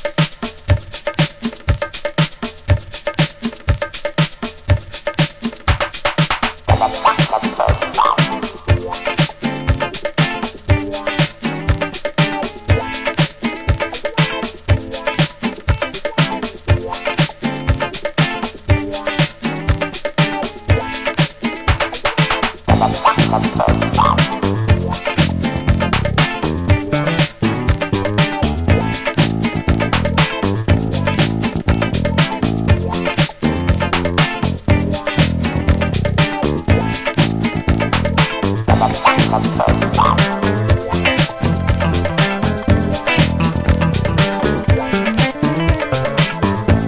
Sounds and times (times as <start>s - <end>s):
Music: 0.0s - 46.8s.